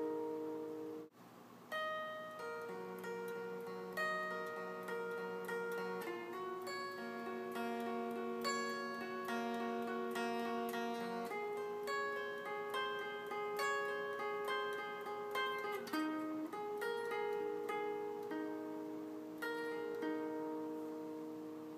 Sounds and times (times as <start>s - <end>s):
Guitar: 0.0s - 21.7s.